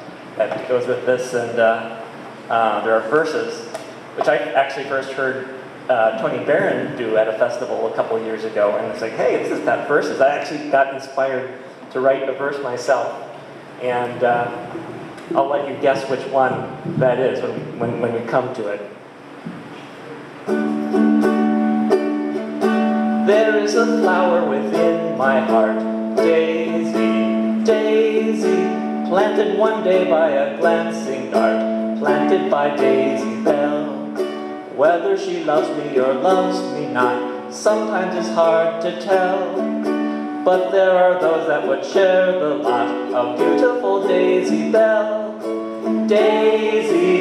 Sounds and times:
Speech: 0.4 - 19.0
Music: 20.5 - 47.2.

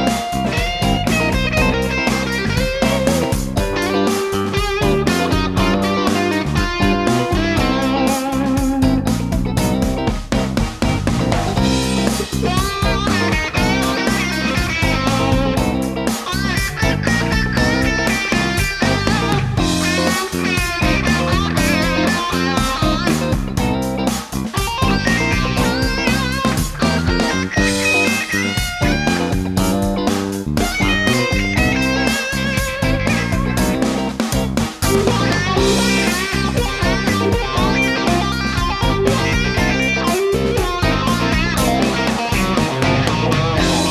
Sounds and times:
Bass guitar: 0.0 - 43.9.

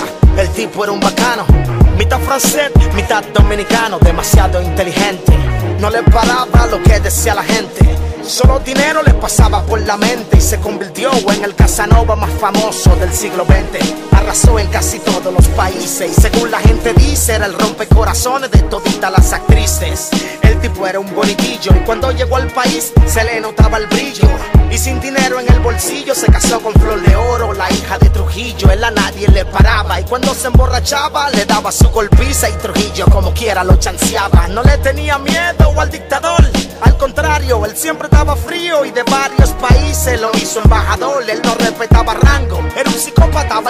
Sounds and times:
Music: 0.0 - 43.6.

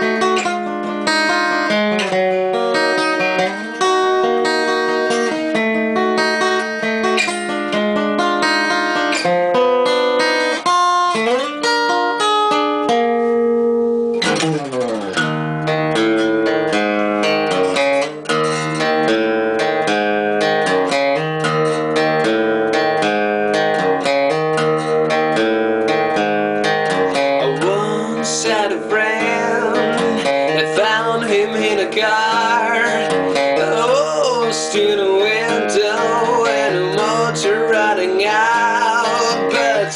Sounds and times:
Electric guitar: 0.0 - 39.9
Strum: 0.0 - 39.9.

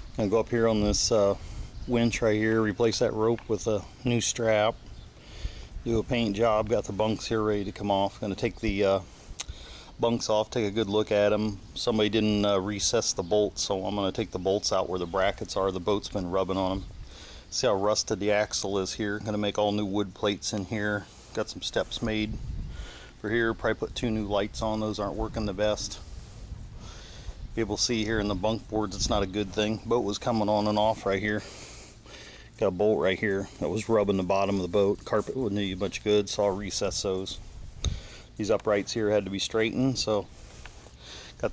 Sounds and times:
Speech: 0.2 - 4.8, 5.8 - 9.1, 10.0 - 16.9, 17.5 - 22.4, 23.2 - 26.0, 27.6 - 31.5, 32.6 - 37.4, 38.4 - 40.3.

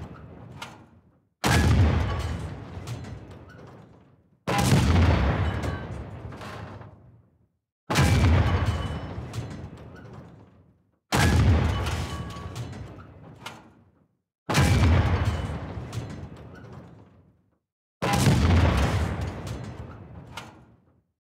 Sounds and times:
Bang: 0.0 - 7.2, 7.9 - 17.4, 18.0 - 21.0.

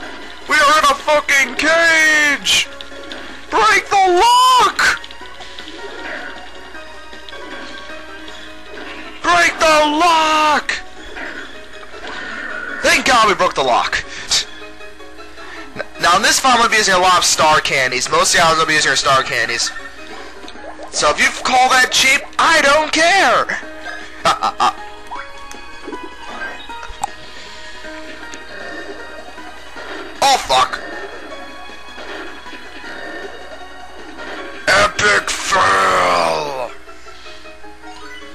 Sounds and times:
Music: 0.0 - 38.3
Speech: 0.5 - 2.7, 9.2 - 10.8, 12.8 - 14.4, 16.0 - 19.7, 21.0 - 23.6, 30.2 - 30.8.

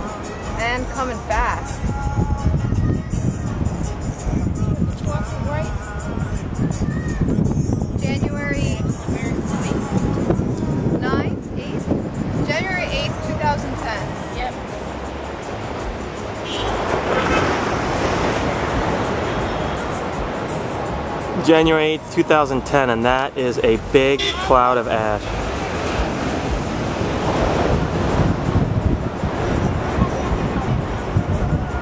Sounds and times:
Music: 0.0 - 31.8.

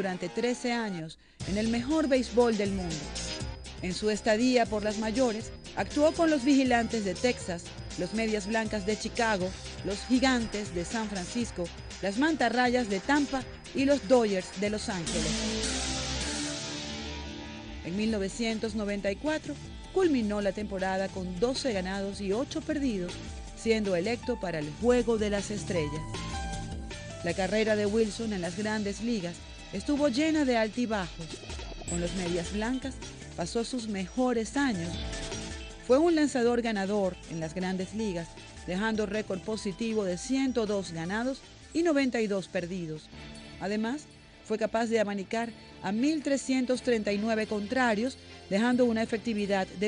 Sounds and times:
Speech: 0.0 - 3.1, 3.8 - 15.5, 17.9 - 26.0, 27.2 - 35.0, 35.9 - 49.8
Music: 0.0 - 49.8.

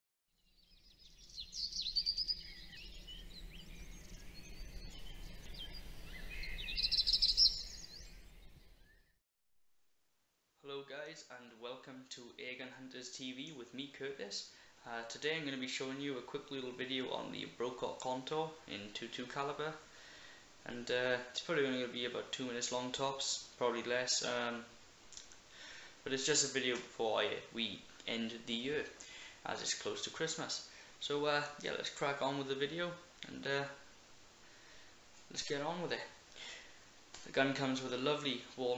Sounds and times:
Bird vocalization, bird call, bird song: 0.4 - 9.2.

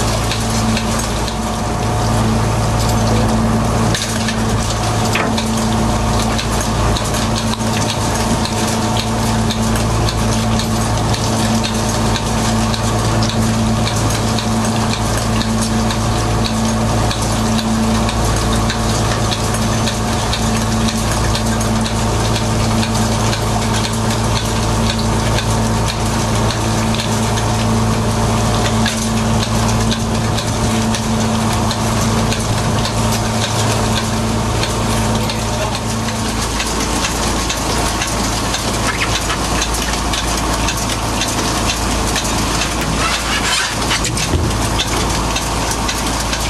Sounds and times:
Boat, Water vehicle: 0.0 - 46.4.

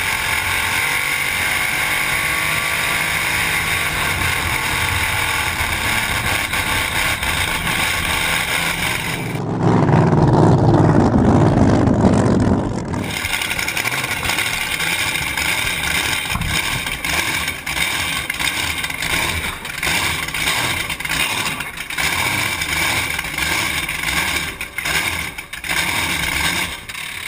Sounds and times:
Motorboat, speedboat: 0.0 - 27.2
Outside, rural or natural: 0.0 - 27.2.

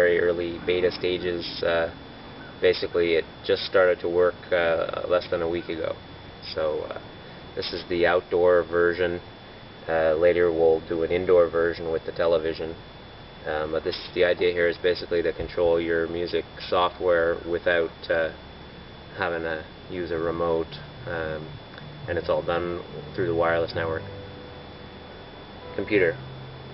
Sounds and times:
Speech: 0.0 - 2.0, 2.6 - 7.0, 7.6 - 9.2, 9.9 - 12.8, 13.5 - 18.4, 19.2 - 24.0, 25.8 - 26.2.

